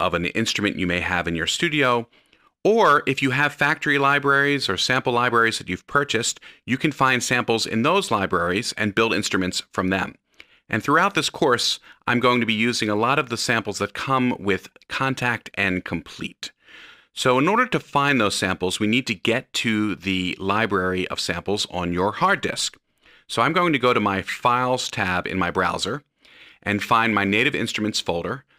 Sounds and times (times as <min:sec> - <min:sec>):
Speech: 0:00.0 - 0:16.6, 0:17.2 - 0:28.5.